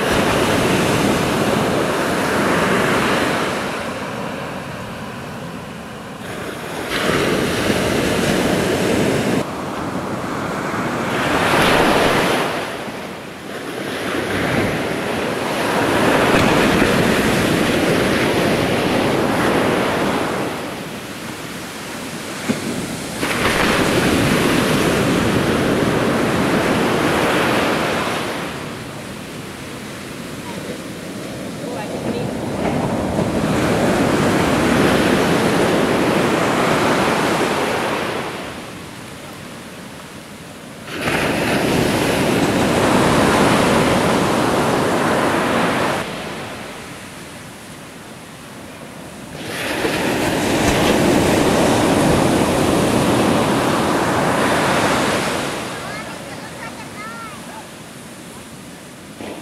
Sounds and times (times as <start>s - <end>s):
Outside, rural or natural: 0.0s - 59.4s.